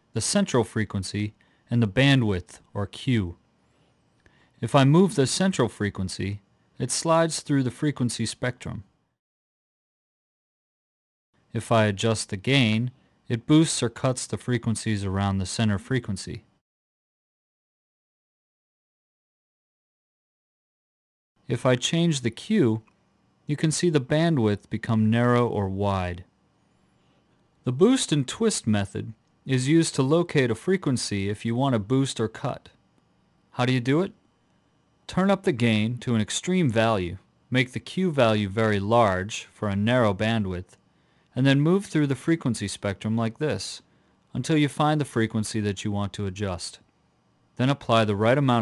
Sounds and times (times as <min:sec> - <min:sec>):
Speech: 0:00.1 - 0:03.4, 0:04.6 - 0:08.9, 0:11.5 - 0:16.6, 0:21.4 - 0:22.9, 0:23.5 - 0:26.3, 0:27.6 - 0:32.8, 0:33.6 - 0:34.2, 0:35.1 - 0:46.9, 0:47.6 - 0:48.6.